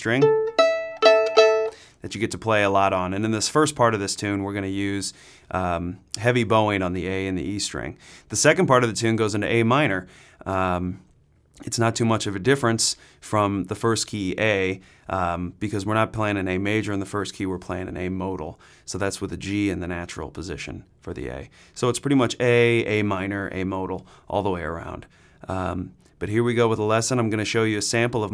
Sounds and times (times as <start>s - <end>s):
Speech: 0.0s - 0.3s, 2.0s - 28.3s.